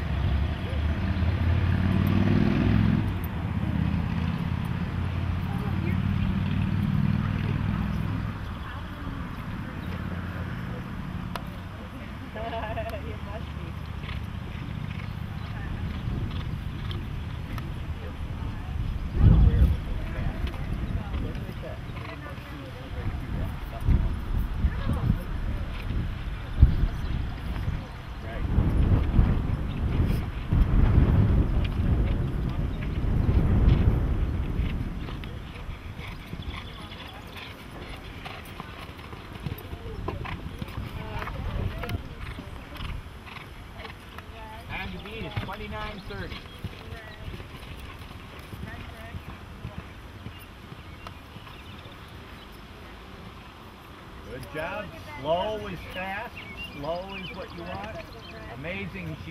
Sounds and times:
Clip-clop: 0.0s - 59.3s.

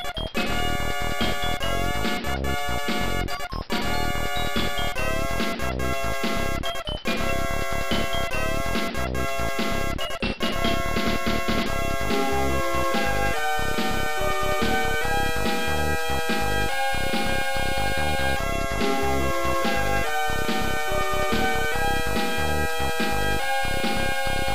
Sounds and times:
Soundtrack music: 0.0s - 24.5s.

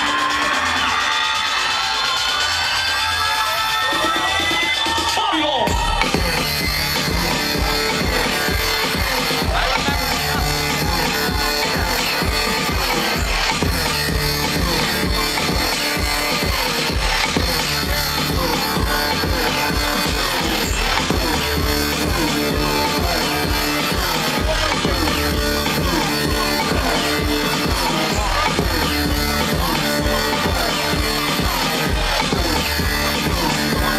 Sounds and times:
Music: 0.0s - 33.9s.

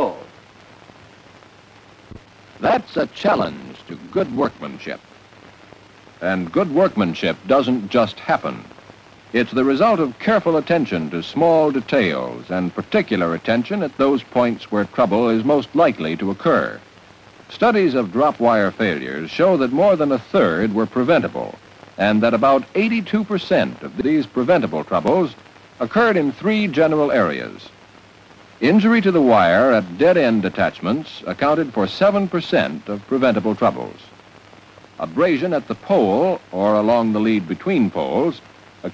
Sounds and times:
Speech: 0.0s - 0.3s, 2.6s - 5.0s, 6.2s - 8.7s, 9.4s - 16.8s, 17.5s - 27.7s, 28.6s - 34.1s, 35.0s - 38.9s.

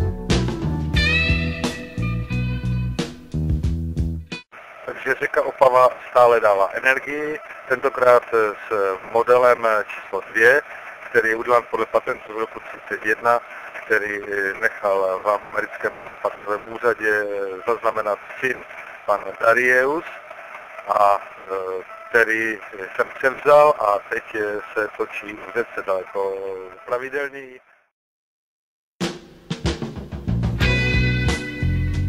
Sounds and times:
Speech: 4.9s - 20.2s, 20.9s - 27.6s.

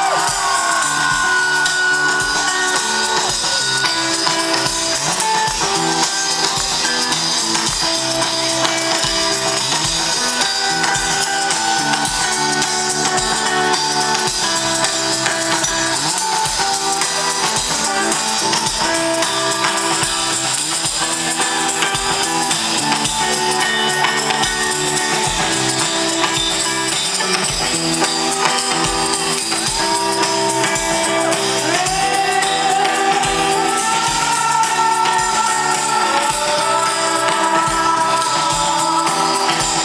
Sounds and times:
Music: 0.0s - 39.8s.

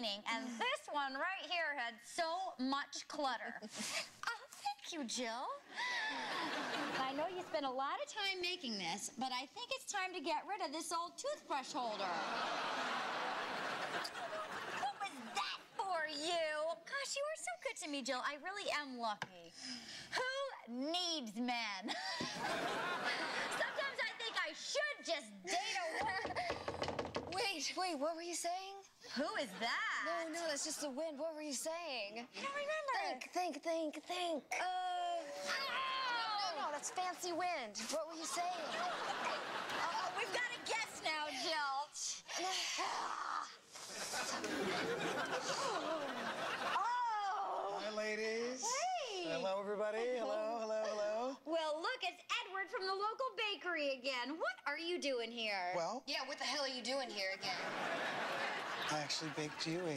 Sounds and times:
Giggle: 42.4s - 47.2s.

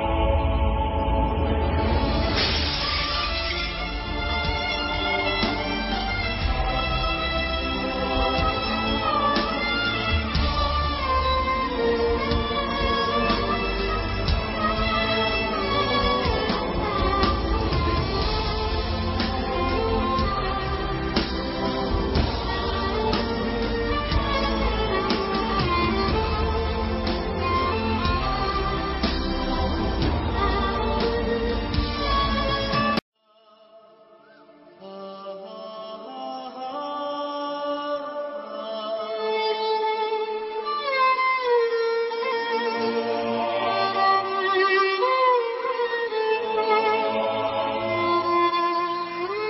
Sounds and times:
Violin, fiddle: 2.0s - 33.0s, 34.2s - 49.4s.

